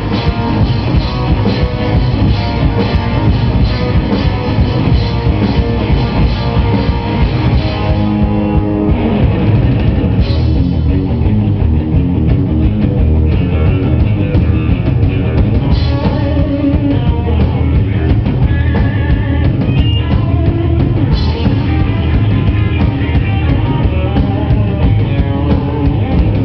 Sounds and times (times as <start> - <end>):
Bass drum: 0.0 - 26.4
Drum kit: 0.0 - 26.4
Rock music: 0.0 - 26.4.